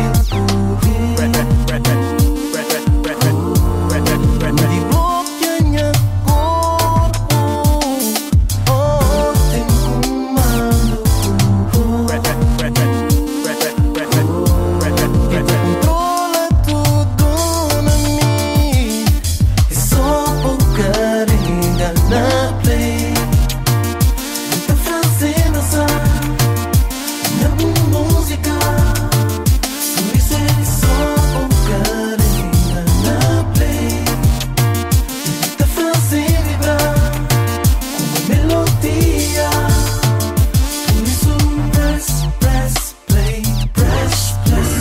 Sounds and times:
Music of Africa: 0:00.0 - 0:44.8.

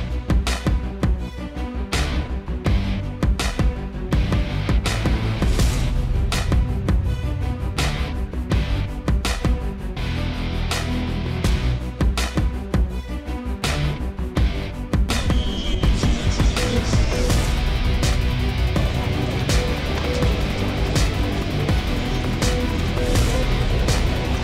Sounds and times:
Music: 0:00.0 - 0:24.4
Speech: 0:15.3 - 0:17.4.

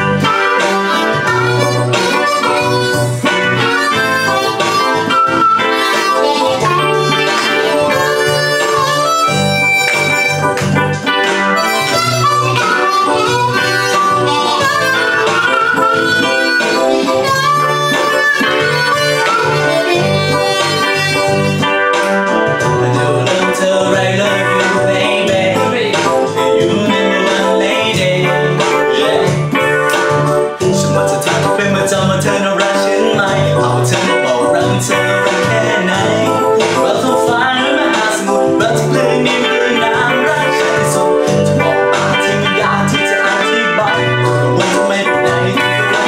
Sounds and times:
Harmonica: 0:00.0 - 0:26.0
Piano: 0:00.0 - 0:46.0.

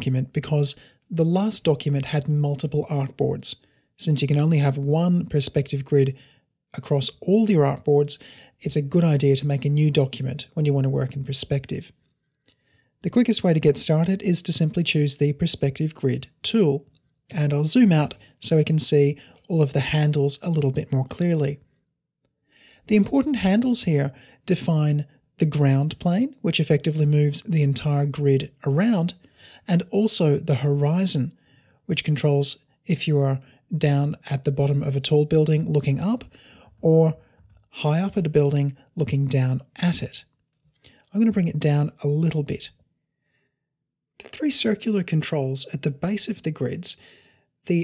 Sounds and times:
Speech: 0:00.0 - 0:06.2, 0:06.8 - 0:12.0, 0:13.0 - 0:21.6, 0:22.8 - 0:42.8, 0:44.2 - 0:47.0.

